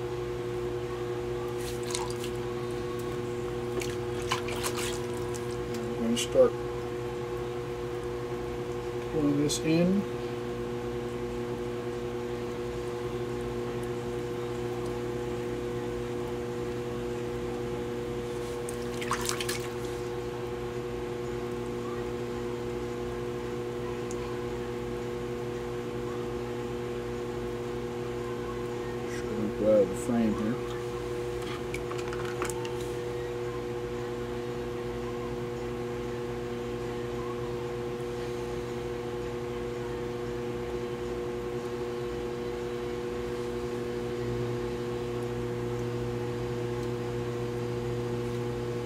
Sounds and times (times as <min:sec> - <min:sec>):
Liquid: 0:01.5 - 0:02.5, 0:03.7 - 0:05.9, 0:18.3 - 0:20.2.